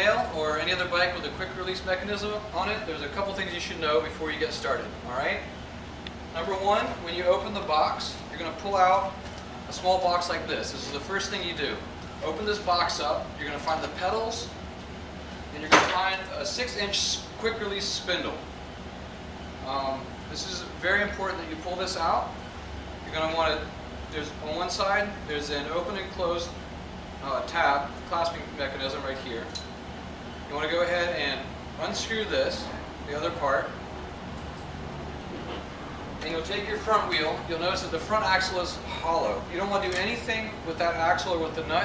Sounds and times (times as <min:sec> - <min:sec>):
Speech: 0:00.0 - 0:05.5, 0:06.4 - 0:14.6, 0:15.5 - 0:18.4, 0:19.6 - 0:22.4, 0:23.0 - 0:26.6, 0:27.2 - 0:29.6, 0:30.5 - 0:33.8, 0:36.2 - 0:41.8.